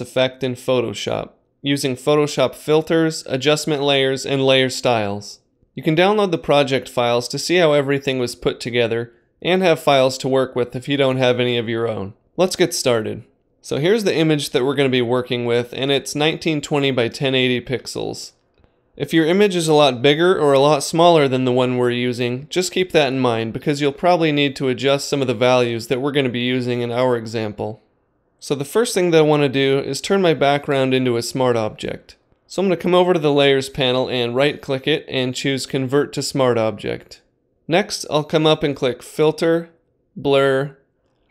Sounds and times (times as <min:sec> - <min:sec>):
Speech: 0:00.0 - 0:18.4, 0:19.0 - 0:40.8.